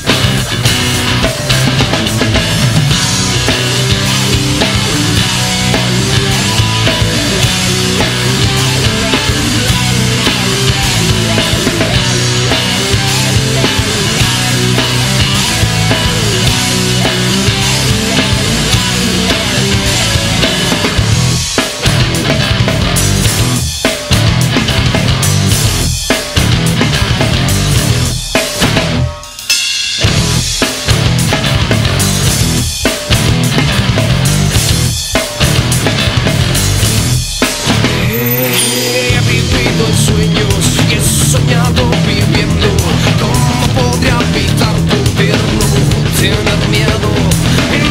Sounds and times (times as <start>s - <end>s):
Music: 0.0s - 47.9s.